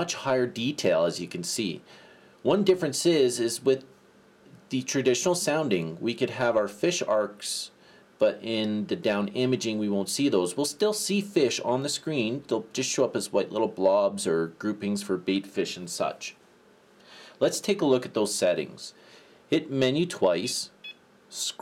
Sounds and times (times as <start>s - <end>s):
Speech: 0.0s - 3.9s, 4.5s - 16.4s, 17.4s - 21.6s.